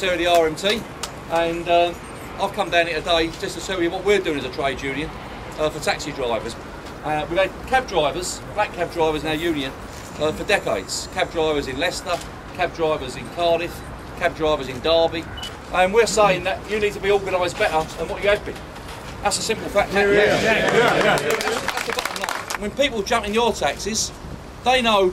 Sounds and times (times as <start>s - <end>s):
Speech: 0.0s - 18.6s, 19.2s - 25.1s.